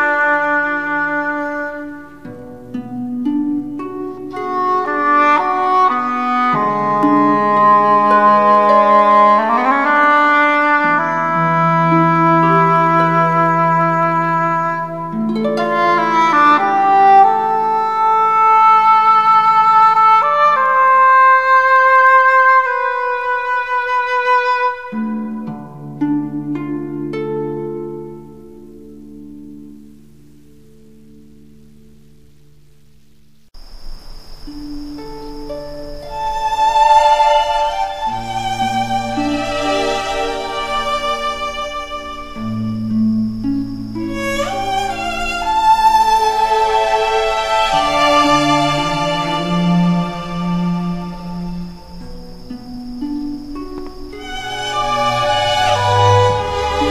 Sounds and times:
Violin, fiddle: 0.0 - 26.7, 35.4 - 56.9
Sad music: 0.0 - 30.0, 34.5 - 56.9.

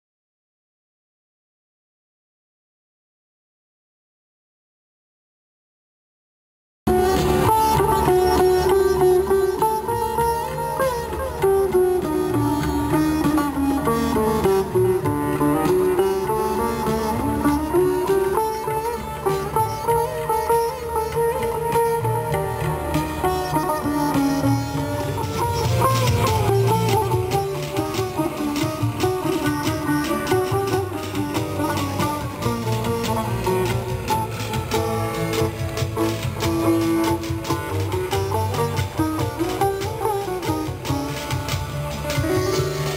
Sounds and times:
Music: 6.9 - 42.9.

